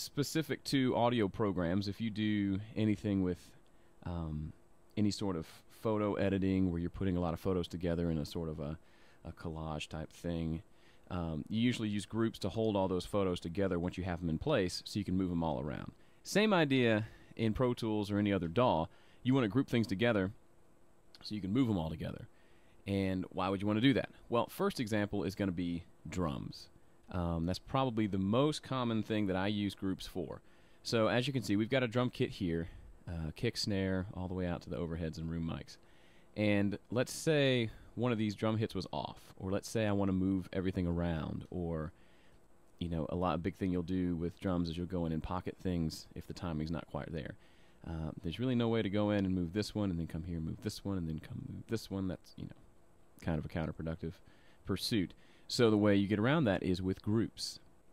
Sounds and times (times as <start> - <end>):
Speech: 0.0 - 20.4, 21.2 - 35.8, 36.4 - 42.0, 42.8 - 52.6, 53.2 - 57.6.